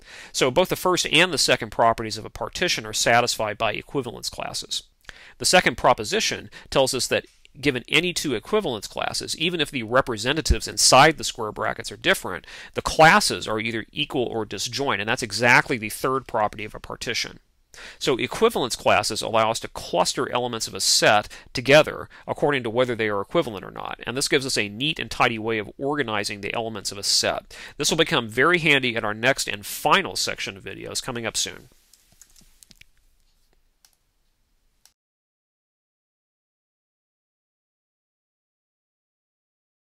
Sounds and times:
Speech: 0.4 - 17.4, 18.0 - 31.7.

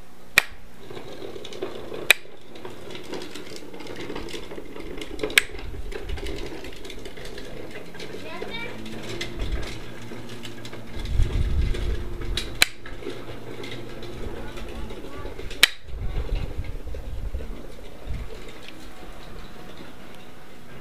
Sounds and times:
Speech: 8.2 - 8.9, 14.3 - 15.5.

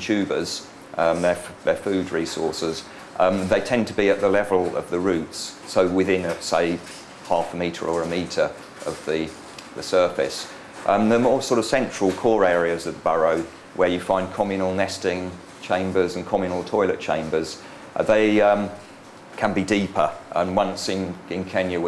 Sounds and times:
Speech: 0.0 - 21.8.

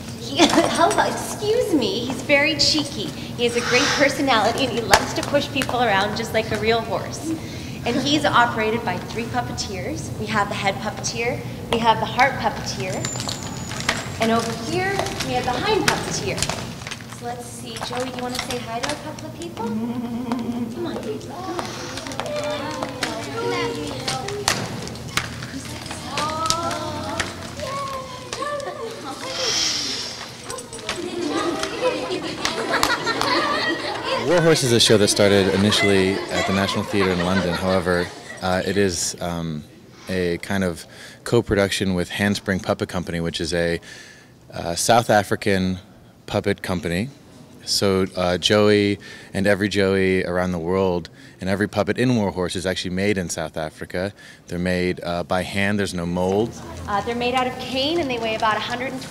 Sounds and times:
Clip-clop: 12.7 - 29.4.

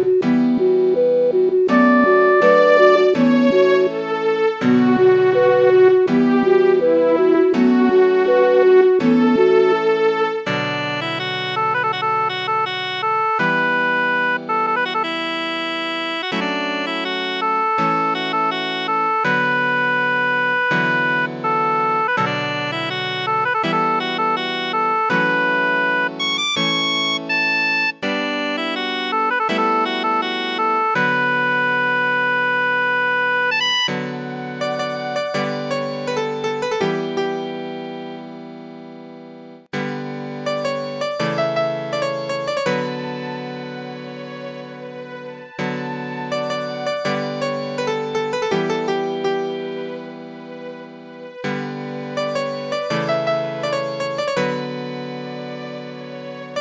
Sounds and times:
Musical instrument: 0.0 - 56.6.

